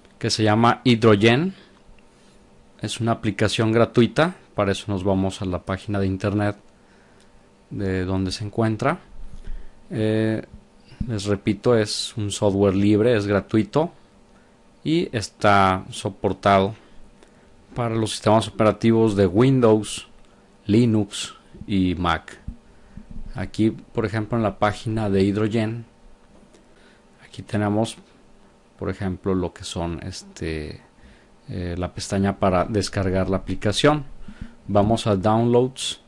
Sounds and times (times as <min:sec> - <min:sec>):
Speech: 0:00.2 - 0:01.6, 0:02.8 - 0:06.6, 0:07.7 - 0:09.1, 0:09.9 - 0:14.0, 0:14.8 - 0:16.8, 0:17.7 - 0:20.1, 0:20.7 - 0:22.5, 0:23.3 - 0:25.9, 0:27.2 - 0:28.1, 0:28.8 - 0:30.8, 0:31.5 - 0:34.1, 0:34.7 - 0:36.0.